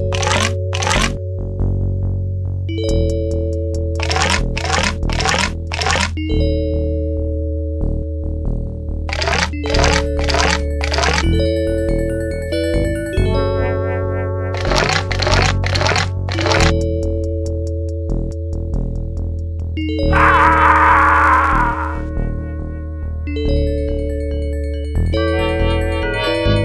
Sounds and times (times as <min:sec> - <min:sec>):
Music: 0:00.0 - 0:26.6.